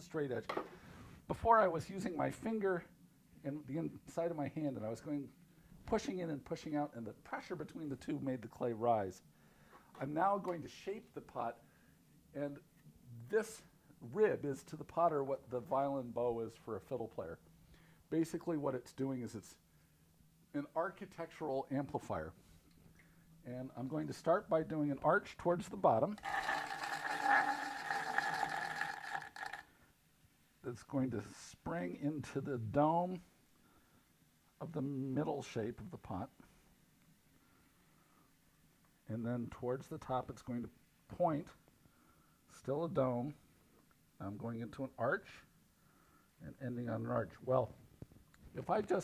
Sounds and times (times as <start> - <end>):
Speech: 0.0 - 0.5, 1.3 - 9.2, 10.0 - 11.6, 12.4 - 17.4, 18.1 - 19.6, 20.5 - 22.4, 23.4 - 26.2, 30.6 - 33.3, 34.6 - 36.5, 39.1 - 41.6, 42.5 - 43.4, 44.2 - 45.5, 46.4 - 47.8, 48.5 - 49.0.